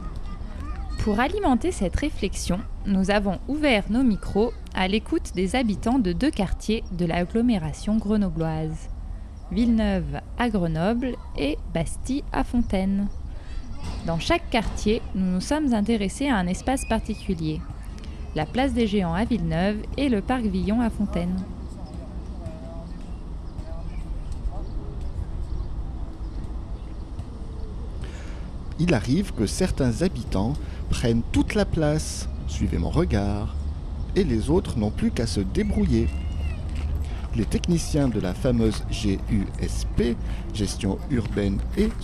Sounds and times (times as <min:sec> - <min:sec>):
Speech: 0:00.6 - 0:08.9, 0:34.2 - 0:36.2, 0:37.3 - 0:42.0.